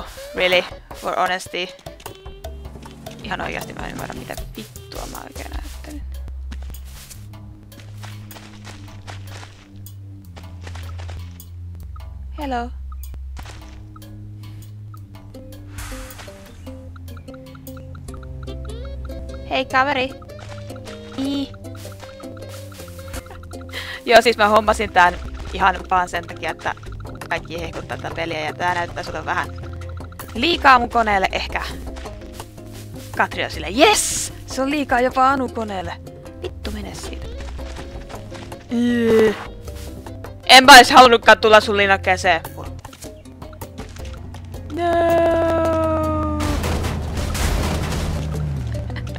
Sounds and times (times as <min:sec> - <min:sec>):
Music: 0:00.0 - 0:49.1
Speech: 0:00.4 - 0:01.8, 0:03.2 - 0:06.0, 0:12.4 - 0:12.8, 0:19.5 - 0:20.2, 0:21.2 - 0:21.5, 0:24.0 - 0:29.5, 0:30.4 - 0:31.8, 0:33.2 - 0:36.0, 0:36.6 - 0:37.2, 0:40.5 - 0:42.7, 0:44.7 - 0:46.6.